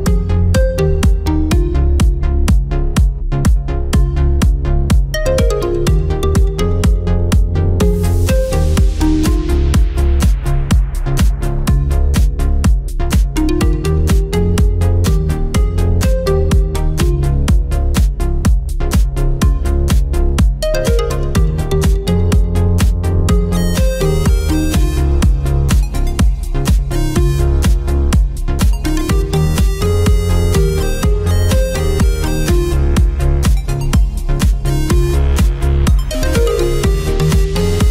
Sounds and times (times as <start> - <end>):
Music: 0.0 - 37.9.